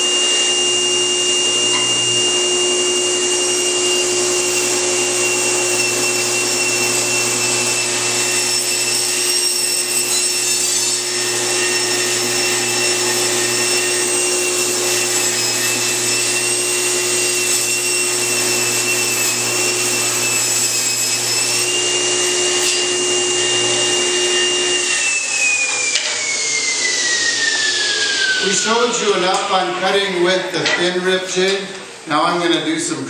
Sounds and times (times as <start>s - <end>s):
Tools: 22.6s - 22.9s, 25.7s - 26.4s
Speech: 28.4s - 33.1s.